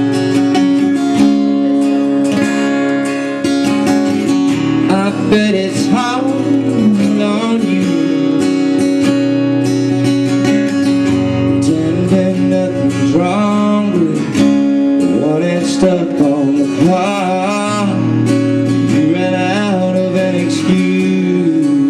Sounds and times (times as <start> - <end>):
Music: 0.0 - 21.8.